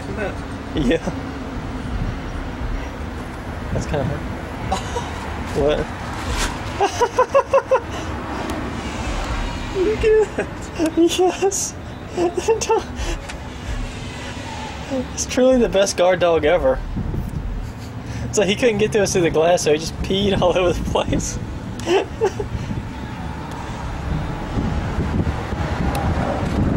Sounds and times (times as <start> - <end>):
Speech: 14.9 - 16.8, 18.3 - 21.4.